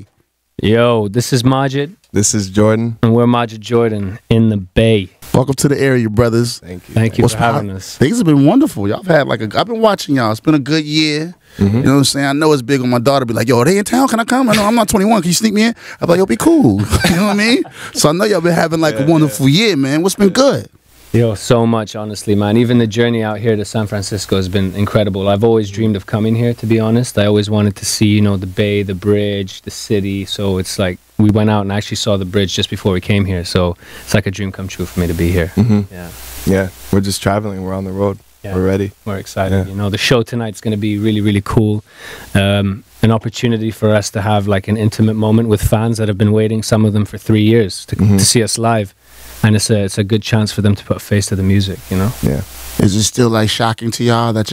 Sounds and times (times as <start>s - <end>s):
Speech: 0.0s - 54.5s.